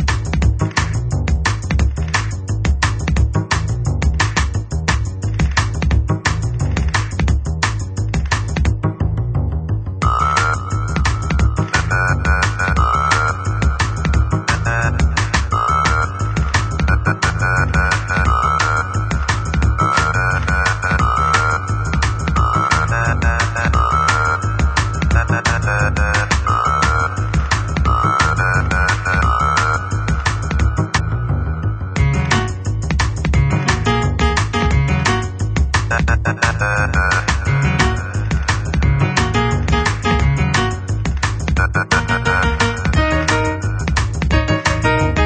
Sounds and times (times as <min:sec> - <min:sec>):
Music: 0:00.0 - 0:45.2.